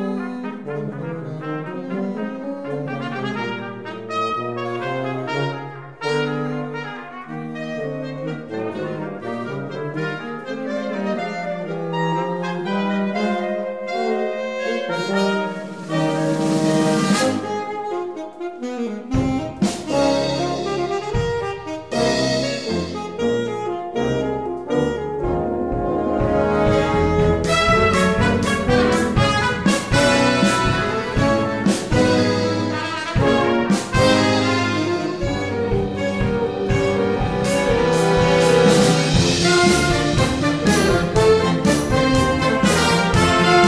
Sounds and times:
Trombone: 0:00.0 - 0:43.6.

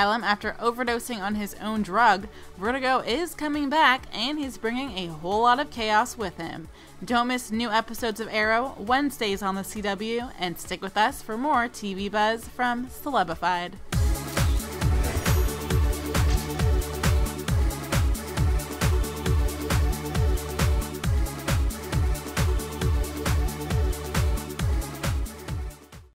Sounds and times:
Speech: 0:00.0 - 0:13.8
Music: 0:00.0 - 0:26.1.

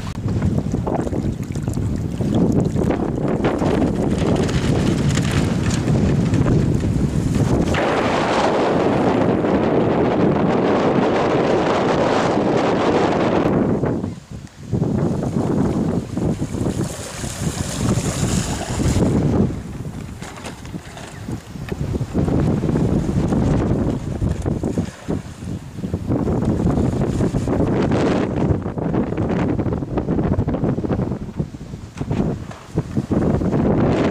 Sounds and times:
Sailboat, sailing ship: 0:00.0 - 0:34.1
Wind noise (microphone): 0:00.0 - 0:34.1.

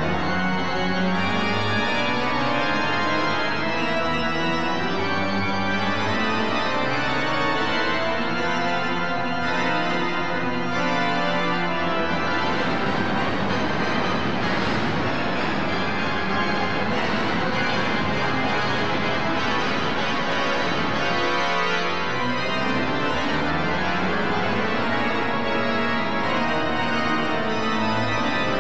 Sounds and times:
Hammond organ: 0:00.0 - 0:28.6.

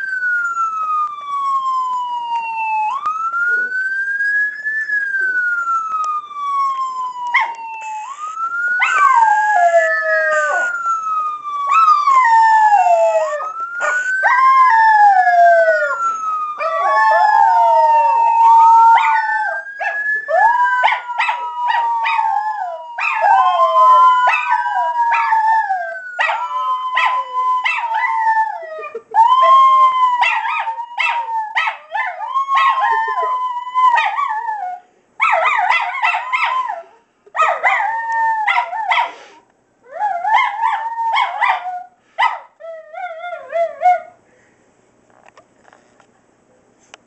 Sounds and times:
Howl: 0:08.8 - 0:38.9, 0:39.9 - 0:42.0, 0:42.6 - 0:44.2.

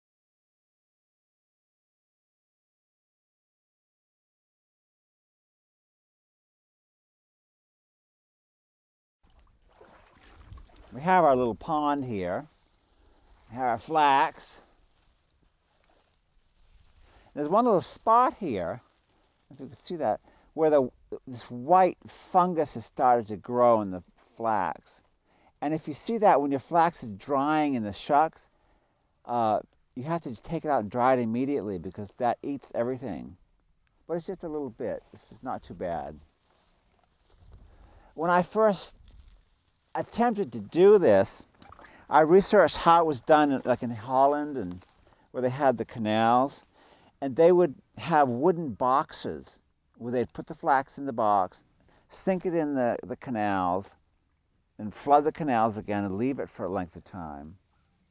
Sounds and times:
Speech: 0:10.9 - 0:12.5, 0:13.5 - 0:14.7, 0:17.4 - 0:18.8, 0:19.5 - 0:25.0, 0:25.6 - 0:28.5, 0:29.3 - 0:33.4, 0:34.1 - 0:36.2, 0:38.2 - 0:39.0, 0:40.0 - 0:41.4, 0:42.1 - 0:44.8, 0:45.4 - 0:54.0, 0:54.8 - 0:57.6.

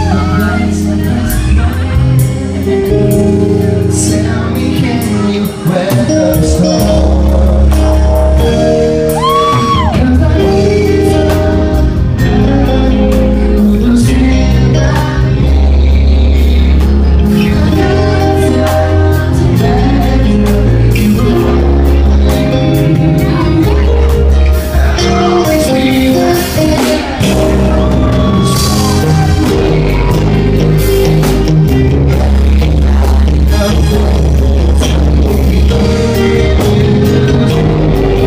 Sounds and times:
Male singing: 0:00.0 - 0:38.2
Music: 0:00.0 - 0:38.2.

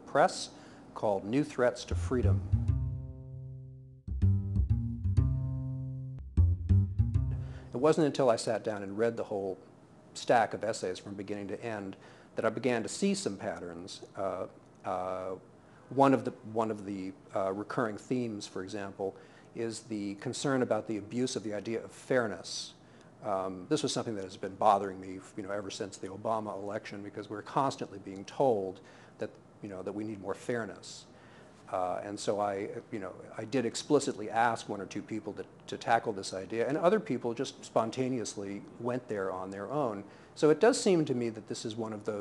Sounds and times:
Speech: 0:00.0 - 0:02.5, 0:07.7 - 0:42.2.

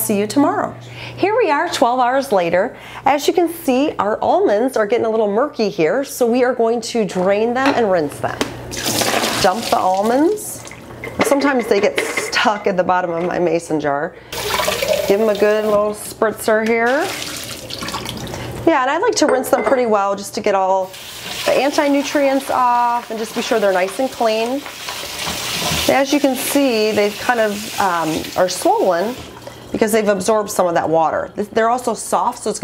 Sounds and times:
Speech: 0:00.0 - 0:08.4, 0:11.2 - 0:14.1, 0:15.1 - 0:17.1, 0:18.7 - 0:20.9, 0:21.5 - 0:24.6, 0:25.9 - 0:29.2, 0:29.8 - 0:32.6
Water tap, faucet: 0:08.7 - 0:10.8, 0:14.4 - 0:15.9, 0:16.9 - 0:18.5, 0:20.8 - 0:29.7
Sink (filling or washing): 0:08.7 - 0:10.9, 0:14.3 - 0:16.0, 0:16.7 - 0:18.6, 0:20.8 - 0:30.1.

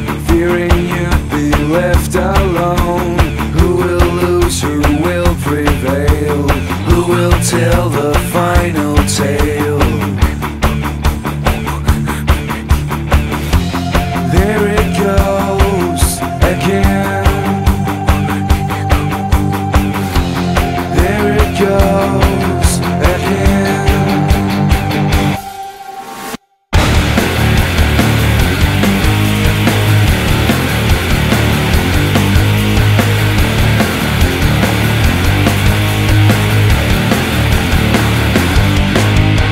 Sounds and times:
Music: 0:00.0 - 0:39.5.

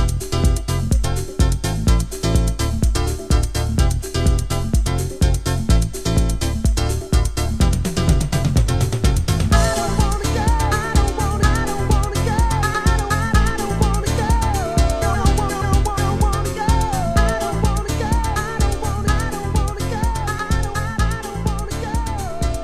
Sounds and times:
Funk: 0:00.0 - 0:22.6.

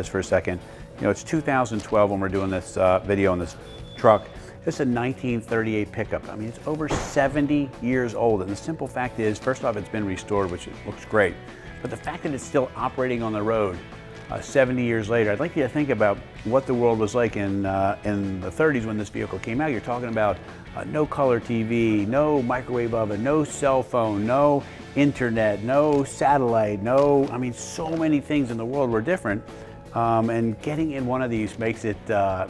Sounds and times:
Music: 0:00.0 - 0:32.4
Speech: 0:00.0 - 0:32.4.

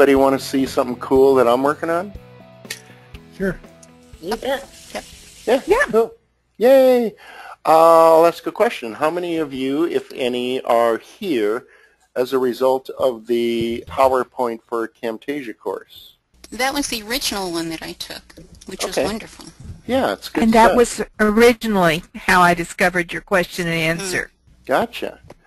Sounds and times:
Music: 0:00.0 - 0:06.1
Narration, monologue: 0:00.0 - 0:25.4.

